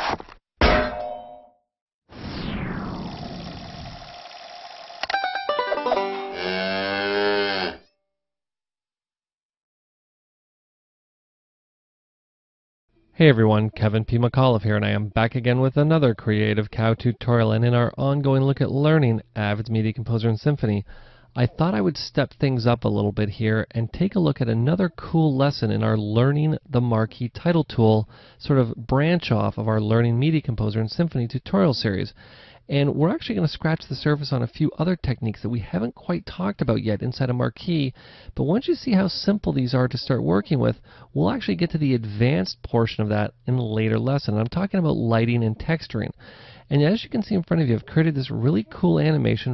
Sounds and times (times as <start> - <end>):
Speech: 13.2 - 20.8, 21.4 - 49.5.